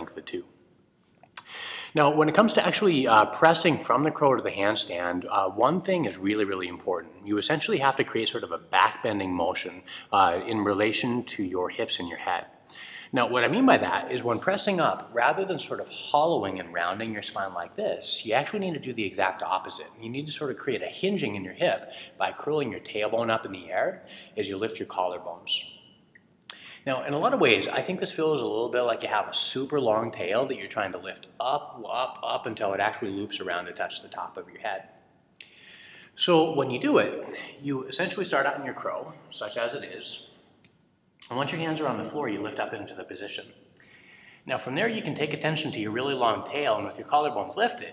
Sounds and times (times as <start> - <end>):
Speech: 0.0 - 0.5, 1.9 - 25.7, 26.5 - 34.8, 36.2 - 40.2, 41.2 - 43.4, 44.5 - 47.9.